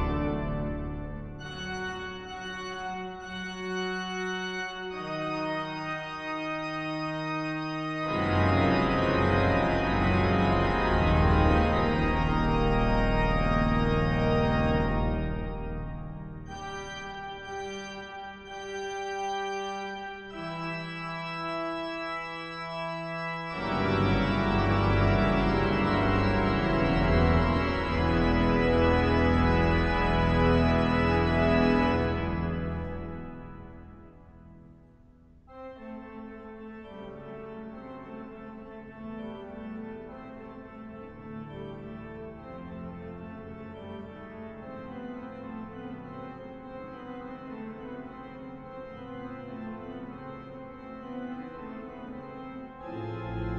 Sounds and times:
Music: 0.0s - 53.5s.

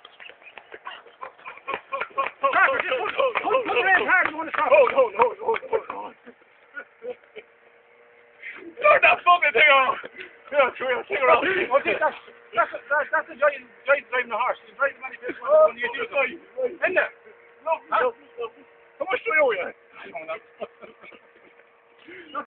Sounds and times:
Speech: 2.5s - 6.2s, 8.8s - 20.4s.

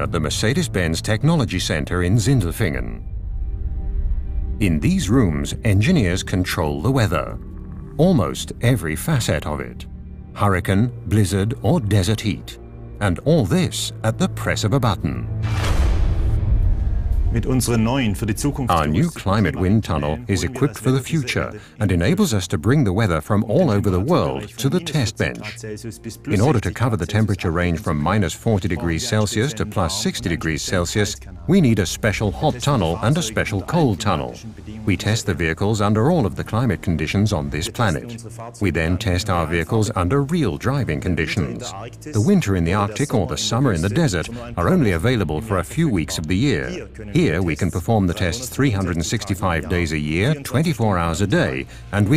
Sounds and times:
Speech: 0.0s - 3.0s, 4.6s - 7.4s, 8.0s - 15.3s, 17.3s - 52.1s
Music: 0.0s - 52.1s.

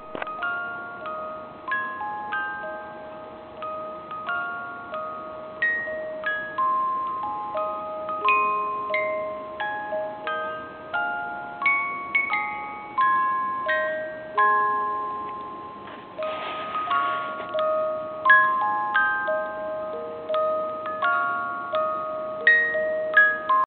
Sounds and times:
Music: 0.0s - 23.6s.

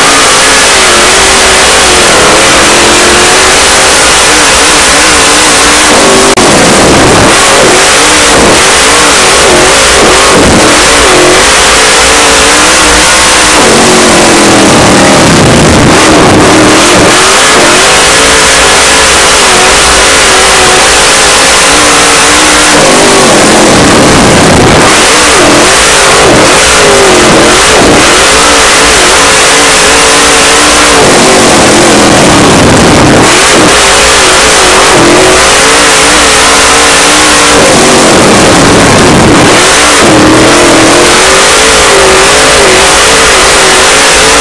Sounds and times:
Car: 0.0s - 44.4s.

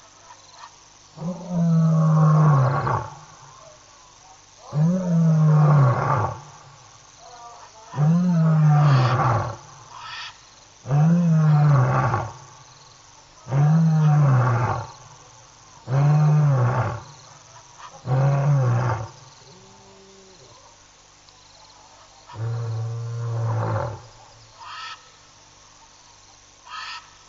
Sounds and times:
Roar: 1.2s - 3.8s, 4.6s - 10.1s, 10.8s - 12.6s, 13.4s - 20.7s, 22.3s - 24.2s.

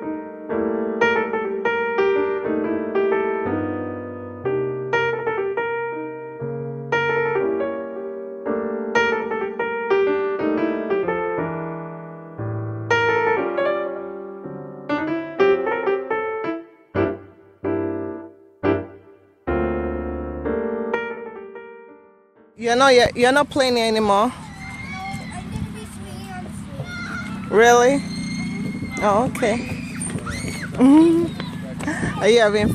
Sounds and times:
Outside, urban or manmade: 0.0s - 32.7s.

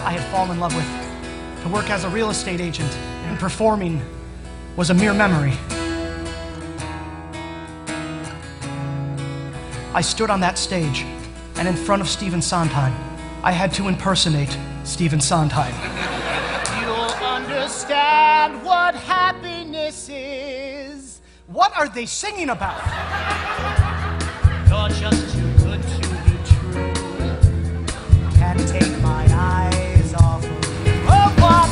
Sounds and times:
Speech: 0.0s - 0.9s, 1.7s - 4.0s, 4.8s - 5.6s, 10.0s - 15.8s, 16.7s - 18.3s, 21.5s - 22.7s, 24.7s - 27.4s
Music: 0.0s - 31.7s.

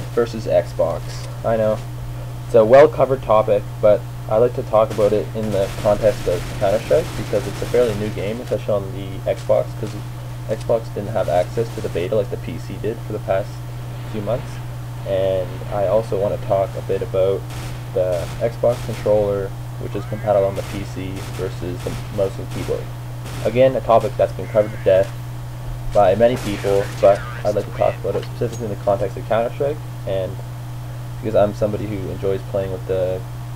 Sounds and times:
Speech: 0.0s - 1.9s, 2.5s - 17.4s, 18.0s - 25.2s, 25.9s - 30.4s, 31.2s - 33.3s.

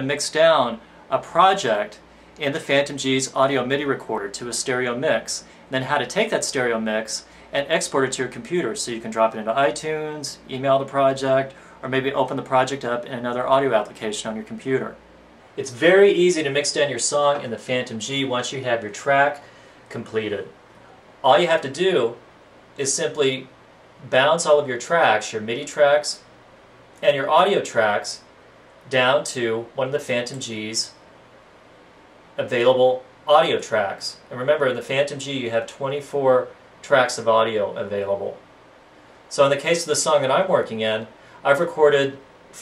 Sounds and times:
Speech: 0.0s - 15.0s, 15.6s - 20.6s, 21.2s - 22.2s, 22.8s - 26.3s, 27.0s - 31.0s, 32.4s - 38.4s, 39.3s - 42.6s.

